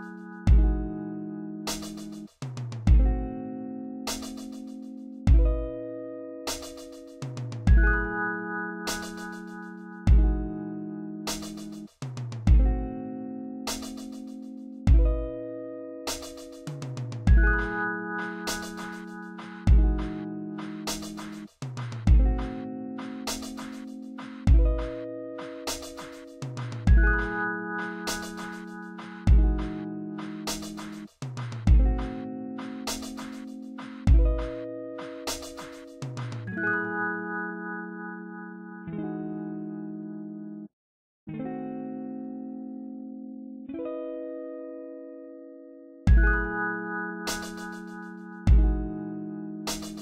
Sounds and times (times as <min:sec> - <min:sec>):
Music: 0:00.0 - 0:40.7, 0:41.3 - 0:50.0.